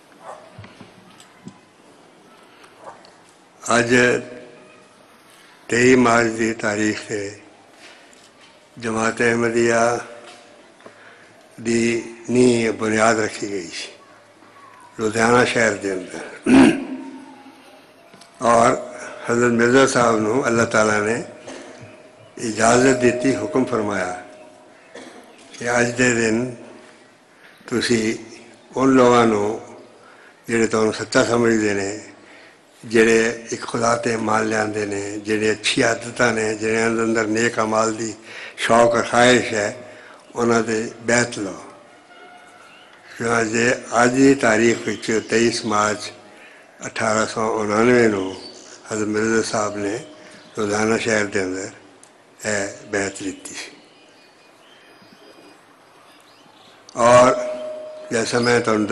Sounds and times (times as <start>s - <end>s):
Male speech, man speaking: 3.6s - 4.5s, 5.7s - 7.5s, 8.8s - 10.2s, 11.6s - 14.0s, 15.0s - 17.3s, 18.4s - 21.4s, 22.4s - 24.3s, 25.5s - 26.6s, 27.7s - 29.8s, 30.5s - 32.2s, 32.8s - 39.8s, 40.4s - 41.7s, 43.2s - 46.2s, 46.8s - 51.8s, 52.4s - 53.8s, 57.0s - 58.9s.